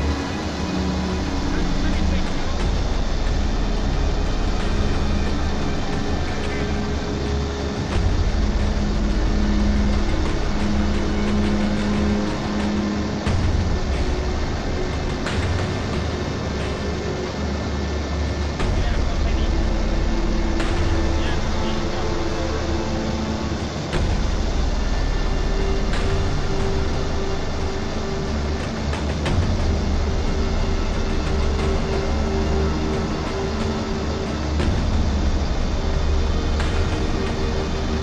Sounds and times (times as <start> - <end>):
Music: 0.0 - 38.0
Speech: 1.3 - 2.8, 18.6 - 19.9, 21.2 - 22.6.